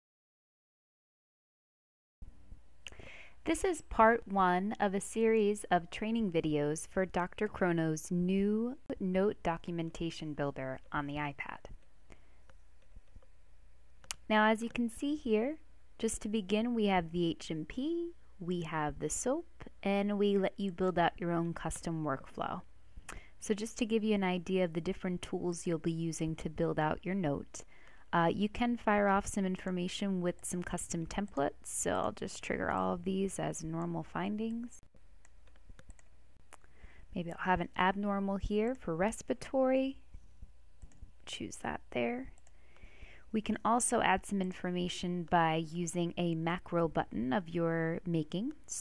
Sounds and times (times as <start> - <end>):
Speech: 3.4 - 11.8, 14.1 - 22.7, 23.4 - 34.8, 37.2 - 40.0, 41.3 - 42.4, 43.3 - 48.8.